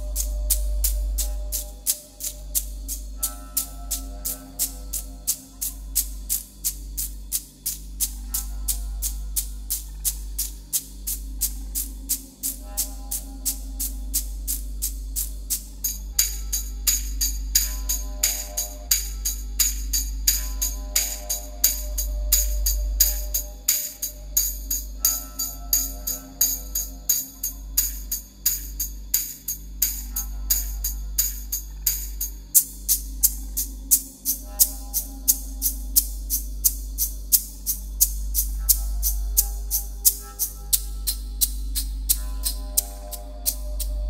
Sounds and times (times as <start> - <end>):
Percussion: 0.0 - 44.0.